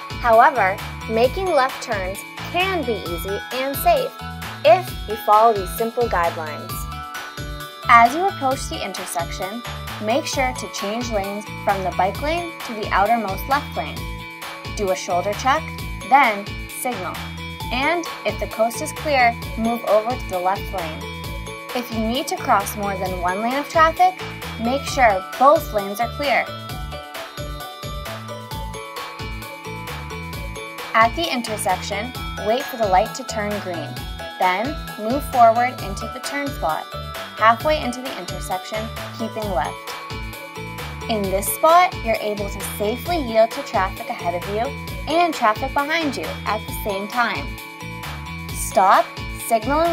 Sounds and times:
Music: 0:00.0 - 0:49.9
Speech: 0:00.2 - 0:04.1, 0:04.7 - 0:06.8, 0:07.9 - 0:14.0, 0:14.8 - 0:21.0, 0:21.8 - 0:26.5, 0:31.0 - 0:36.8, 0:37.4 - 0:39.7, 0:41.1 - 0:47.5, 0:48.6 - 0:49.9.

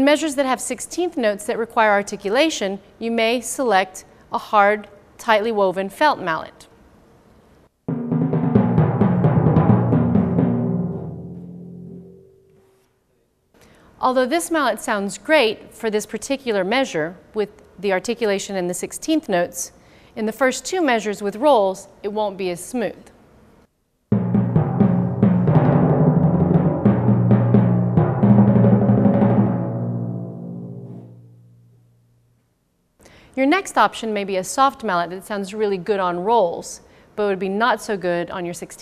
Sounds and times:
Speech: 0:00.0 - 0:06.7, 0:14.0 - 0:23.1, 0:33.4 - 0:38.8
Timpani: 0:07.9 - 0:12.6, 0:24.1 - 0:31.8.

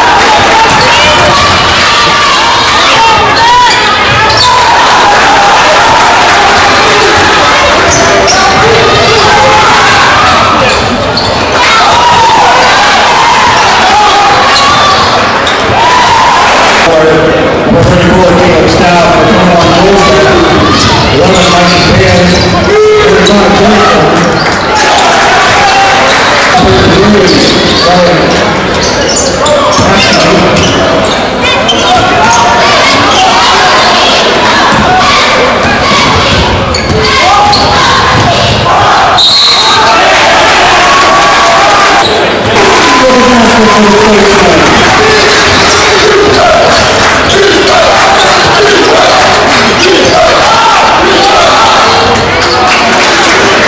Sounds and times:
Inside, public space: 0:00.0 - 0:53.6
Speech: 0:16.8 - 0:24.4, 0:26.5 - 0:36.3, 0:42.7 - 0:46.7
Basketball bounce: 0:34.7 - 0:34.9, 0:36.0 - 0:38.6.

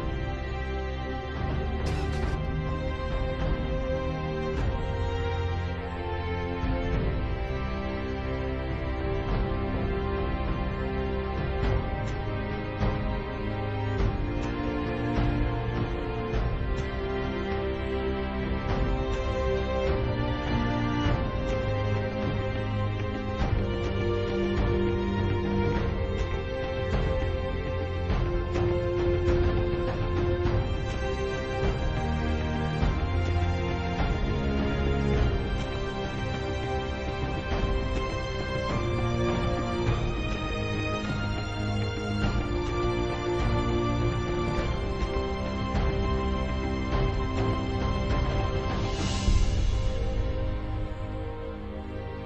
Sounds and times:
Music: 0:00.0 - 0:52.2.

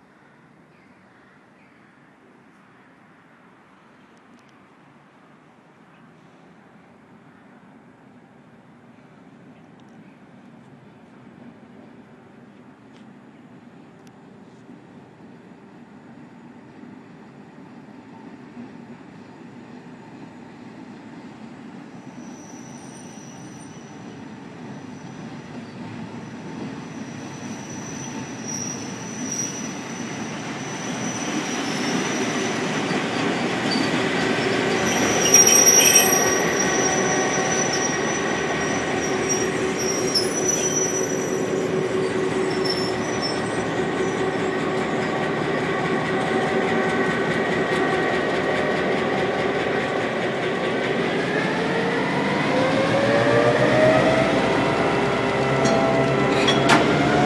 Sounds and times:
Railroad car, train wagon: 0:00.0 - 0:57.2
Train: 0:00.0 - 0:57.2.

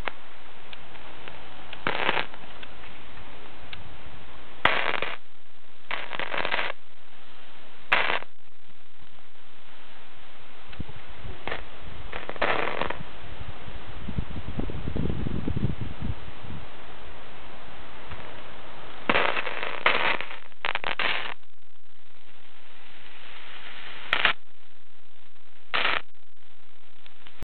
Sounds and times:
Static: 0:00.0 - 0:03.1, 0:04.5 - 0:13.2, 0:18.1 - 0:27.4
Radio: 0:20.1 - 0:27.4.

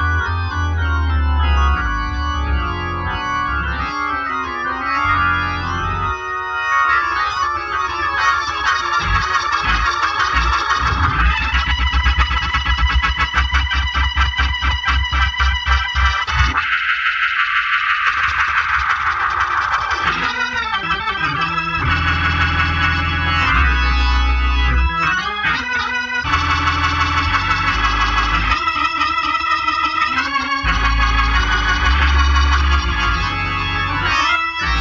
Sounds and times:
Music: 0:00.0 - 0:34.8.

